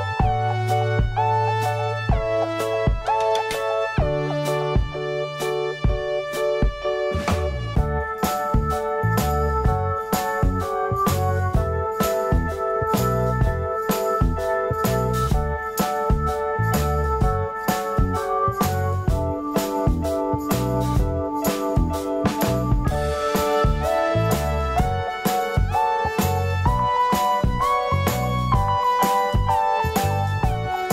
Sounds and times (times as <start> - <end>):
Music: 0.0 - 30.9.